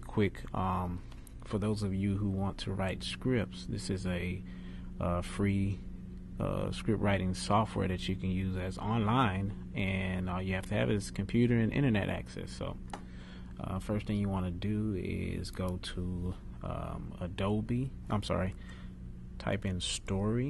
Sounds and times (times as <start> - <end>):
Speech: 0.0 - 4.4, 5.0 - 5.8, 6.4 - 12.8, 13.6 - 18.6, 19.4 - 20.4.